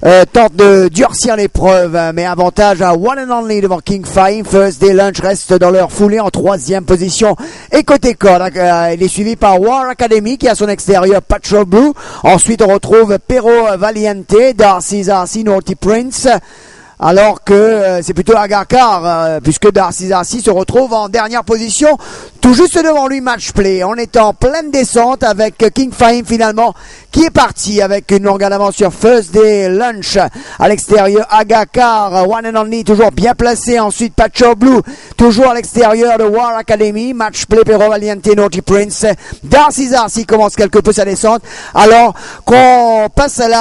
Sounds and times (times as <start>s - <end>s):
Speech: 0.0s - 16.4s, 17.0s - 43.6s.